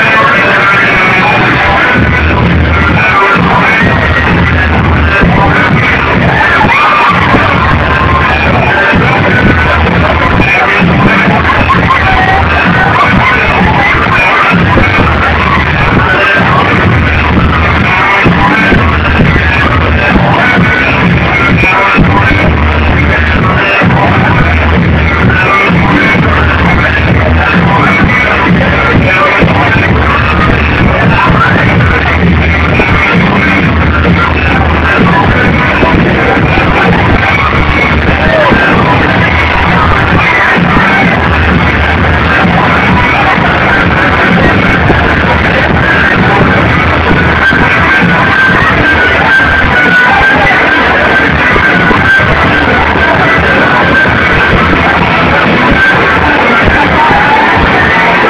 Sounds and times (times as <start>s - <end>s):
Music: 0.0s - 58.2s.